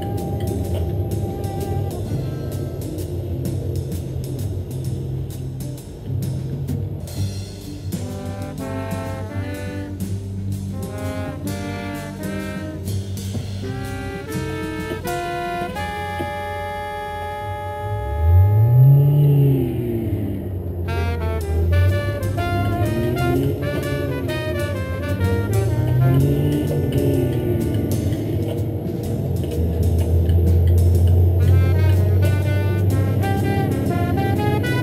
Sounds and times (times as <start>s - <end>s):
Music: 0.0s - 34.8s.